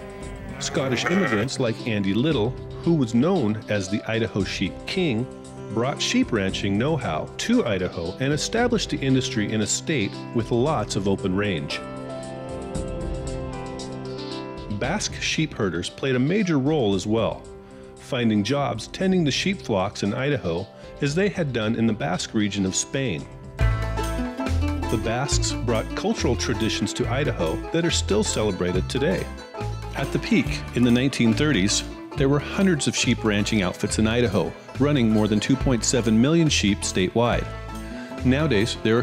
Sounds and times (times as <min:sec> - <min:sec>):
Music: 0:00.0 - 0:39.0
Speech: 0:00.5 - 0:11.8, 0:14.7 - 0:23.3, 0:24.9 - 0:29.4, 0:30.0 - 0:37.5, 0:38.2 - 0:39.0.